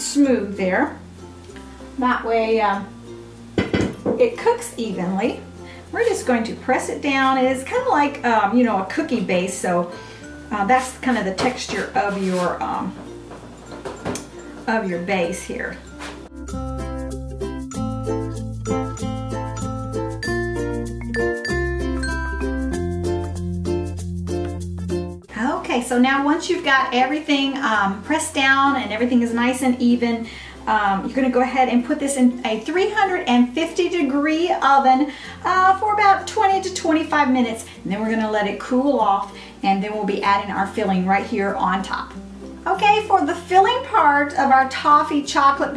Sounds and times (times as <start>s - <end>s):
Speech: 0.0s - 1.0s, 2.0s - 2.9s, 4.2s - 9.9s, 10.5s - 13.0s, 14.7s - 15.8s, 25.3s - 45.7s
Music: 0.0s - 45.7s.